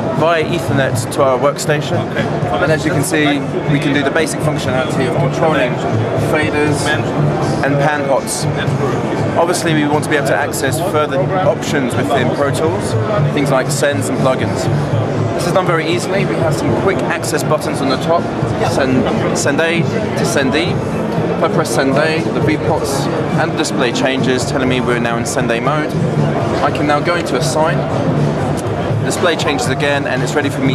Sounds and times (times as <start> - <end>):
Speech: 0.0 - 14.8, 15.4 - 20.8, 21.4 - 26.0, 26.6 - 27.8, 29.0 - 30.7
Music: 0.0 - 30.7.